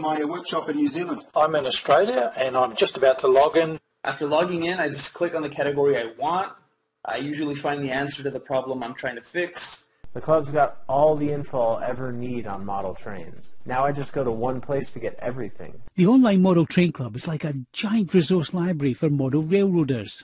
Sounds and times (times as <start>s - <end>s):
Speech: 0.0s - 20.2s.